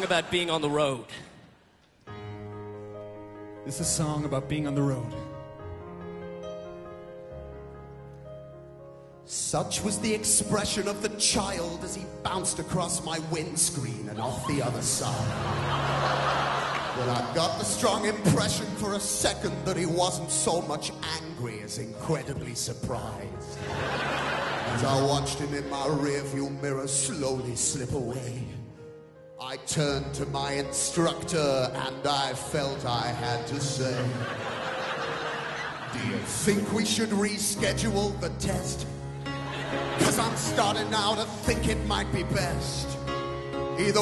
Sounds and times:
Speech: 0.0 - 1.3, 3.7 - 5.3, 9.3 - 15.3, 17.0 - 23.5, 24.7 - 28.6, 29.4 - 34.2, 40.0 - 43.0
Music: 0.0 - 44.0.

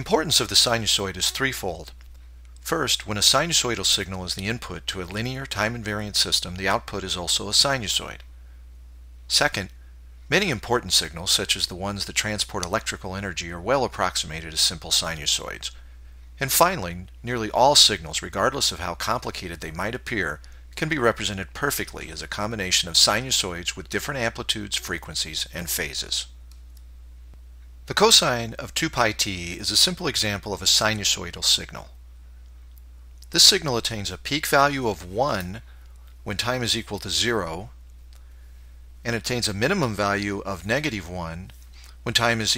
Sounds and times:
Narration, monologue: 0.0 - 42.5.

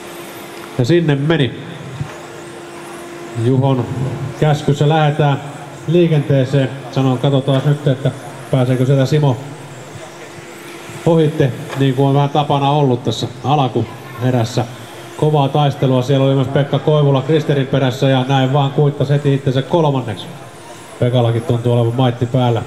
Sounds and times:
Speech: 0.8 - 2.2, 3.4 - 22.6.

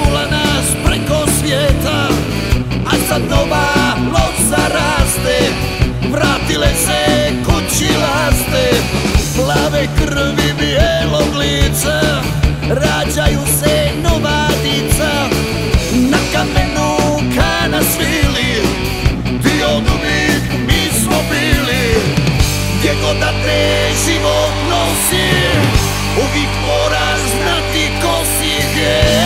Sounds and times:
Psychedelic rock: 0.0 - 29.2.

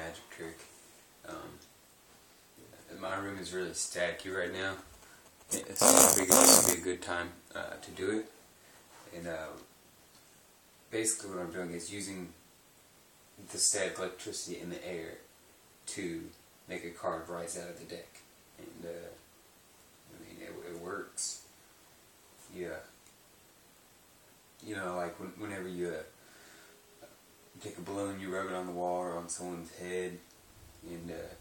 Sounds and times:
Speech: 0.0 - 1.7, 2.6 - 4.9, 5.5 - 8.4, 9.0 - 9.7, 10.9 - 12.4, 13.4 - 19.3, 20.1 - 21.5, 22.4 - 23.0, 24.6 - 26.2, 27.6 - 31.4.

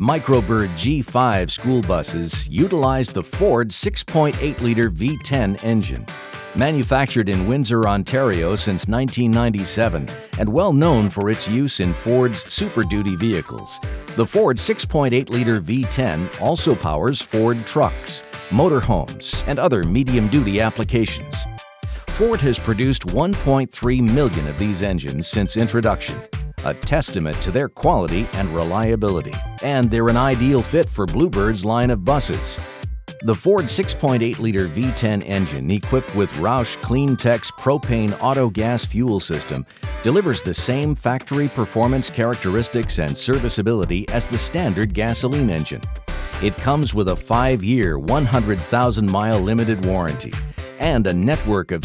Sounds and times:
Speech: 0.0 - 32.6, 33.2 - 45.8, 46.4 - 51.8
Music: 0.0 - 51.8.

